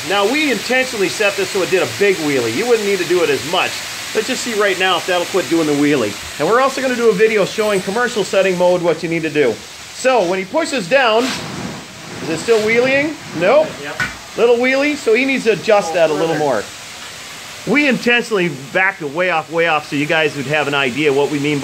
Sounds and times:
Speech: 0:00.0 - 0:11.3, 0:12.3 - 0:16.7, 0:17.7 - 0:21.6.

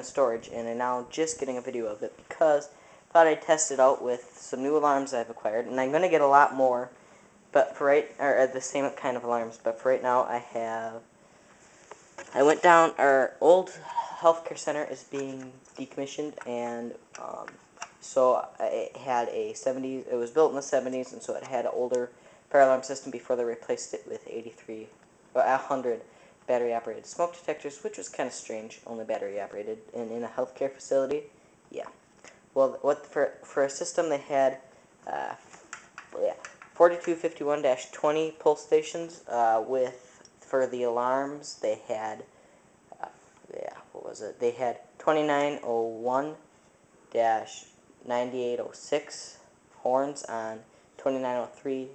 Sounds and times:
Speech: 0:00.0 - 0:11.1, 0:12.2 - 0:32.0, 0:32.6 - 0:35.5, 0:36.1 - 0:42.3, 0:42.9 - 0:46.5, 0:47.1 - 0:51.9.

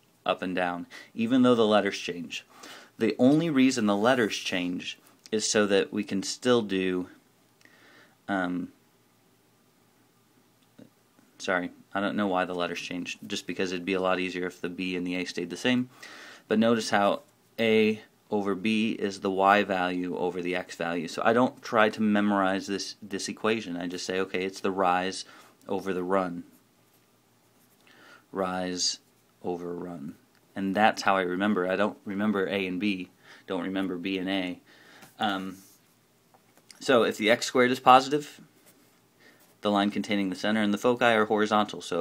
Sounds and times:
Speech: 0:00.2 - 0:07.2, 0:08.3 - 0:08.8, 0:11.4 - 0:15.9, 0:16.5 - 0:26.5, 0:28.3 - 0:34.6, 0:35.2 - 0:35.6, 0:36.7 - 0:38.4, 0:39.6 - 0:42.0.

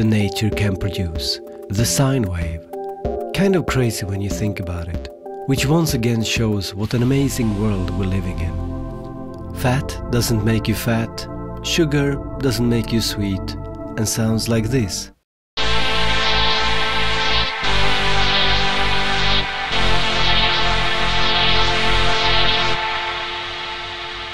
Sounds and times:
Speech: 0:00.0 - 0:02.7, 0:03.3 - 0:08.6, 0:09.6 - 0:15.2
Music: 0:00.0 - 0:24.3.

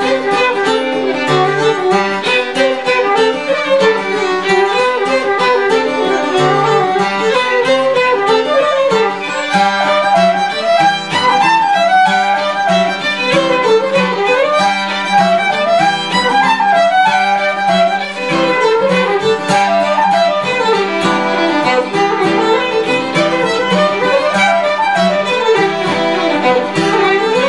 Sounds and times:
Traditional music: 0:00.0 - 0:27.4.

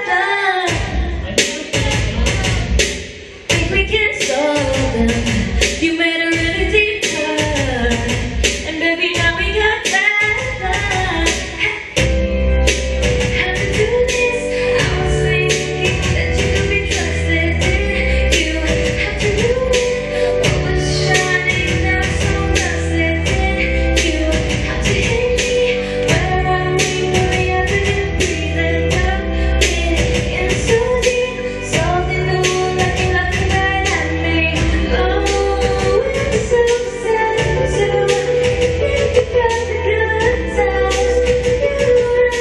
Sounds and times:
Female singing: 0:00.0 - 0:02.8, 0:03.4 - 0:12.1, 0:13.2 - 0:42.4
Music: 0:00.0 - 0:42.4.

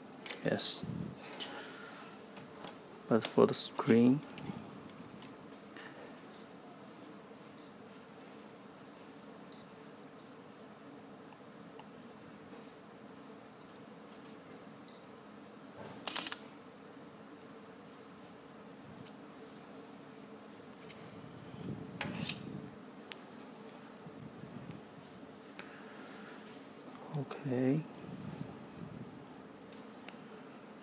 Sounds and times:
Camera: 0:16.0 - 0:16.4.

